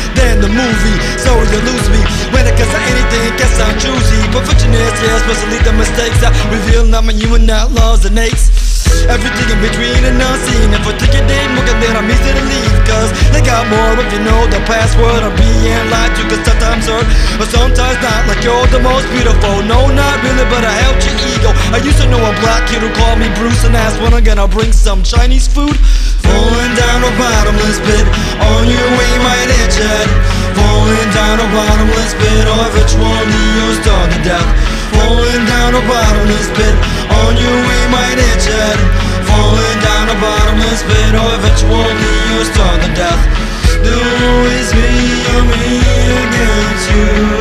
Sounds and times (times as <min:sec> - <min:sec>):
Funk: 0:00.0 - 0:47.4.